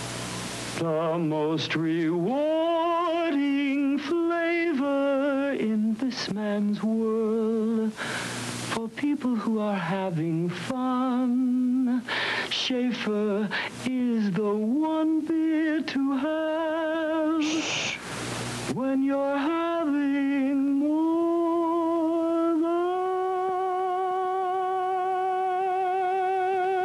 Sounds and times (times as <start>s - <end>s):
Singing: 0.8s - 8.0s, 8.7s - 18.0s, 18.7s - 26.8s.